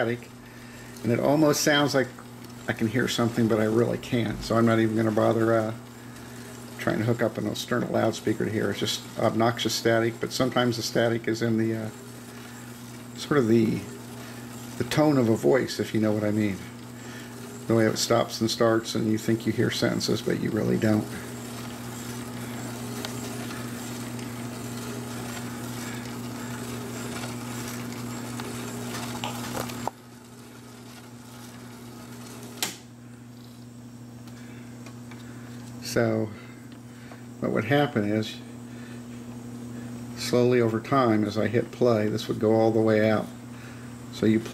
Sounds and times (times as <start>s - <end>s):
Speech: 0.0s - 0.3s, 1.0s - 5.8s, 6.8s - 12.0s, 13.2s - 14.0s, 14.8s - 16.8s, 17.7s - 21.3s, 35.8s - 36.4s, 37.4s - 38.5s, 40.2s - 43.4s, 44.1s - 44.5s.